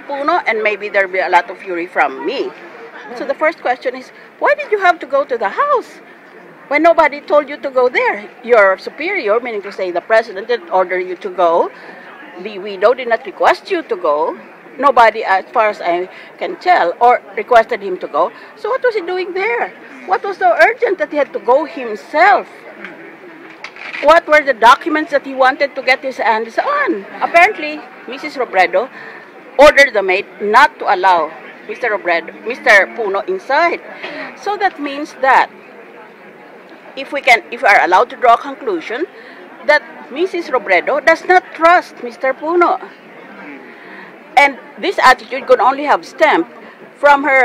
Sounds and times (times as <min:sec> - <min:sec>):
Speech: 0:00.0 - 0:06.0, 0:06.7 - 0:22.7, 0:24.0 - 0:29.0, 0:29.6 - 0:35.5, 0:37.0 - 0:43.6, 0:44.4 - 0:47.4.